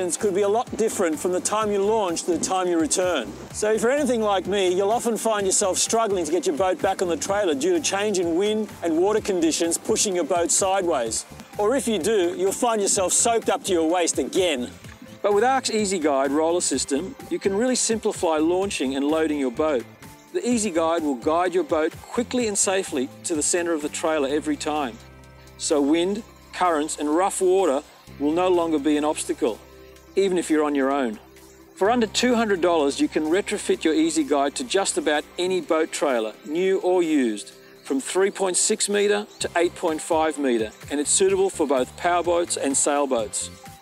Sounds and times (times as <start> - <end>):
Speech: 0.0 - 19.8, 20.4 - 25.0, 25.6 - 29.6, 30.2 - 31.2, 31.8 - 43.6
Music: 0.0 - 43.8.